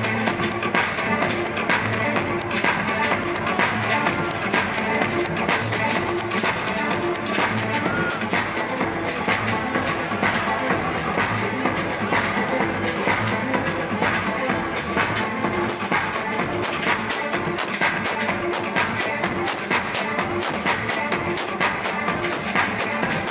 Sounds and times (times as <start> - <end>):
Music: 0.0 - 23.3.